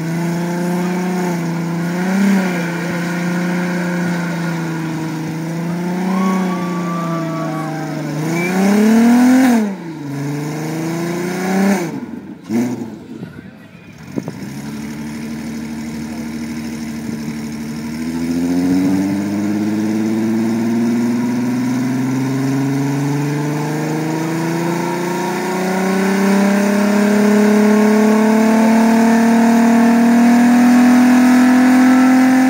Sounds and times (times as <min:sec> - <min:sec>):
Accelerating, revving, vroom: 0:00.0 - 0:12.9, 0:17.4 - 0:32.4
Car: 0:00.0 - 0:32.4
Outside, rural or natural: 0:00.0 - 0:32.4
Speech: 0:13.0 - 0:14.2.